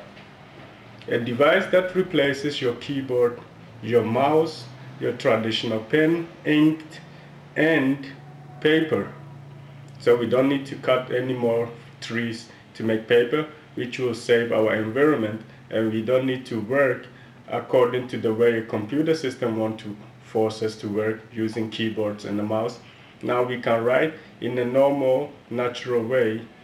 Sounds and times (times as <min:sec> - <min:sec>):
Speech: 0:01.1 - 0:09.4, 0:10.0 - 0:26.6.